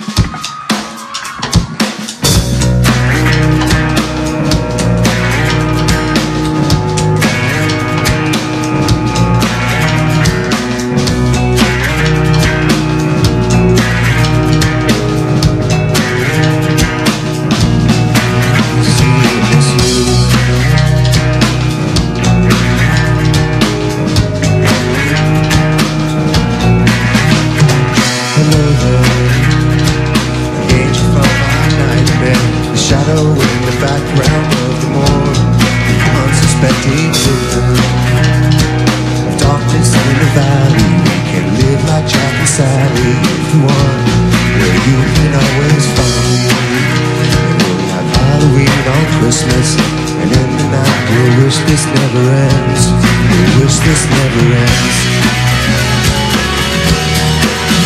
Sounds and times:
Music: 0:00.0 - 0:57.8.

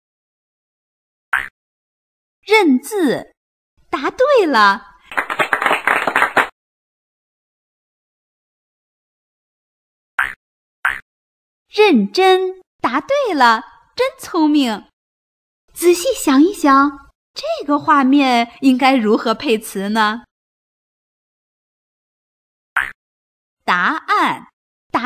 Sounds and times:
Speech: 0:02.5 - 0:04.9, 0:11.7 - 0:14.9, 0:15.7 - 0:20.3, 0:23.7 - 0:25.0.

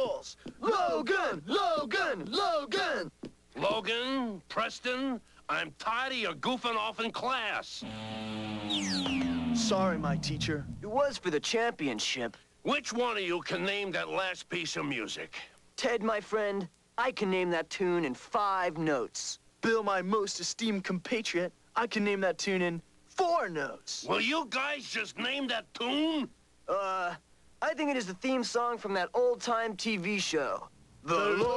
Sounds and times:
Speech: 0:00.0 - 0:07.8, 0:09.6 - 0:31.5.

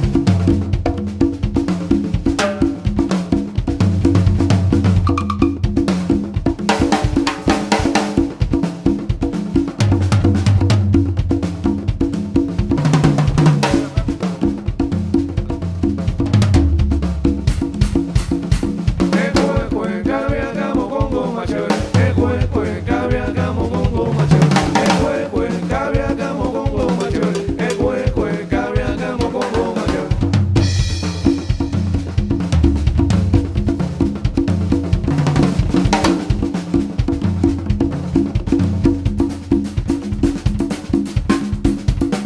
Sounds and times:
Wood block: 0:05.0 - 0:05.6.

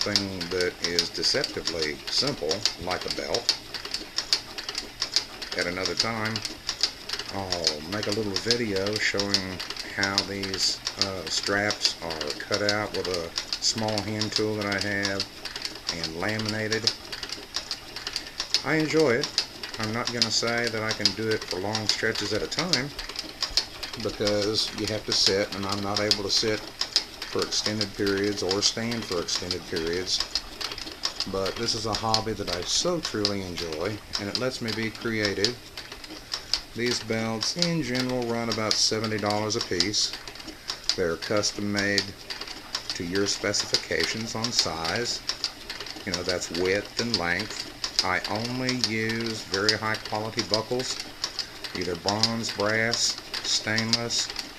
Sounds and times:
Speech: 0:00.0 - 0:03.5, 0:05.5 - 0:06.5, 0:07.3 - 0:15.3, 0:15.9 - 0:17.0, 0:18.6 - 0:23.0, 0:24.0 - 0:26.7, 0:27.3 - 0:30.3, 0:31.2 - 0:35.6, 0:36.8 - 0:40.2, 0:41.0 - 0:42.2, 0:42.9 - 0:45.2, 0:46.0 - 0:51.0, 0:51.7 - 0:54.4
Sewing machine: 0:00.0 - 0:54.5.

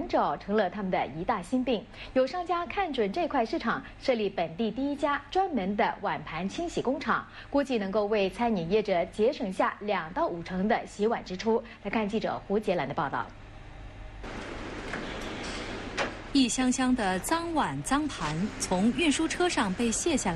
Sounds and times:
Speech: 0:00.0 - 0:13.4, 0:16.4 - 0:20.3.

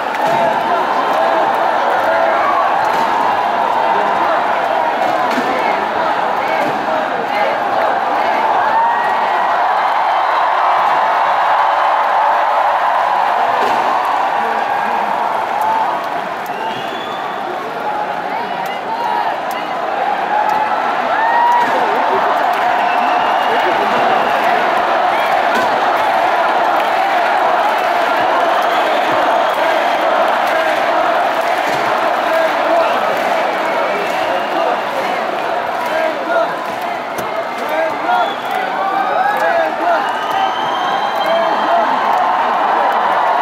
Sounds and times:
Speech: 0:00.2 - 0:08.8, 0:13.9 - 0:26.4, 0:27.0 - 0:43.4.

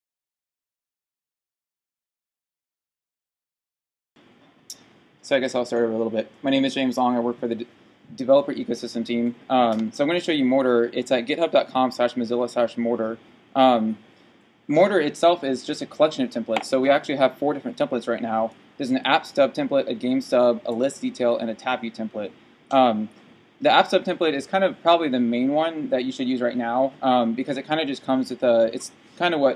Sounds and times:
Speech: 0:05.2 - 0:14.0, 0:14.7 - 0:29.5.

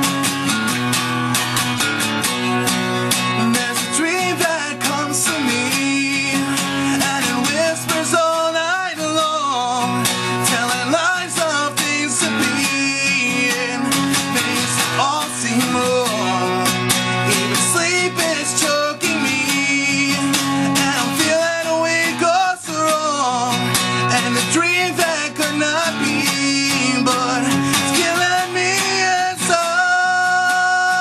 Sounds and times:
Music: 0:00.0 - 0:31.0.

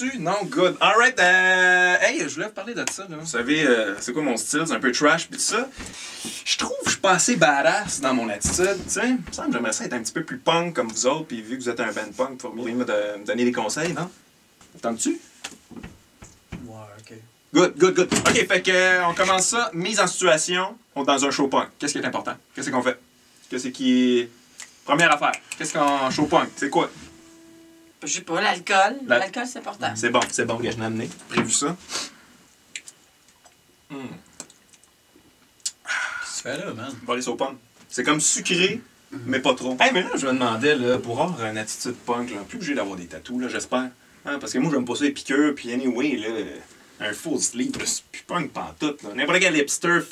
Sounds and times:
Speech: 0:00.0 - 0:14.2, 0:14.8 - 0:15.3, 0:16.6 - 0:27.1, 0:28.0 - 0:31.8, 0:36.3 - 0:50.1.

